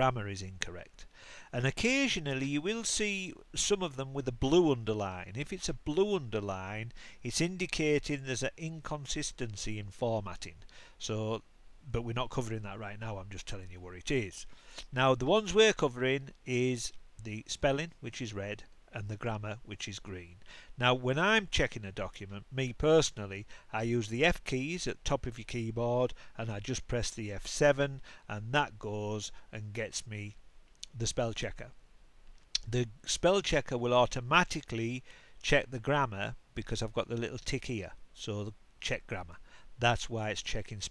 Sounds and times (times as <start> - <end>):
Speech: 0.0 - 31.8, 32.6 - 40.9.